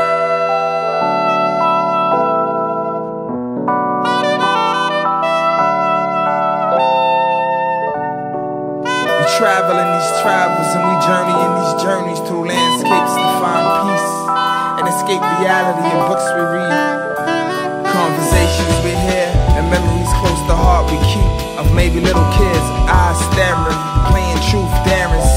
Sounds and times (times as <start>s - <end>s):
Saxophone: 0.0s - 25.3s.